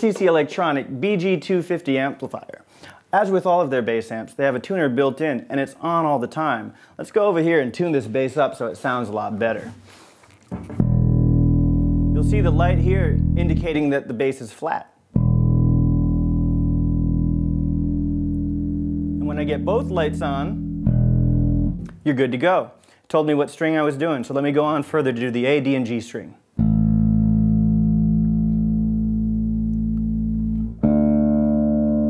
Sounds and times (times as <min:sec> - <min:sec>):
Speech: 0:00.0 - 0:09.8, 0:12.2 - 0:15.0, 0:19.2 - 0:20.6, 0:22.0 - 0:26.4
Music: 0:10.6 - 0:13.7, 0:15.2 - 0:22.0, 0:26.6 - 0:32.0.